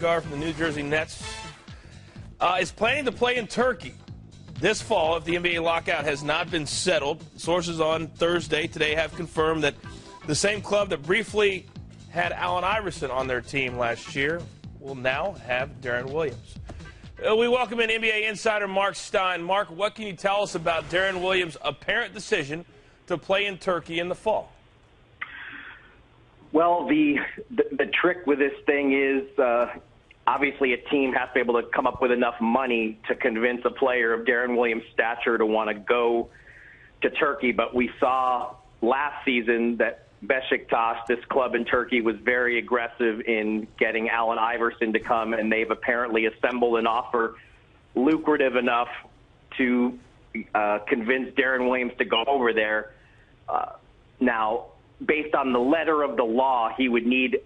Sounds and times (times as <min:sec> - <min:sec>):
Speech: 0:00.0 - 0:01.3, 0:02.4 - 0:04.0, 0:04.6 - 0:16.4, 0:17.2 - 0:24.6, 0:26.5 - 0:36.3, 0:37.0 - 0:47.4, 0:48.0 - 0:57.4.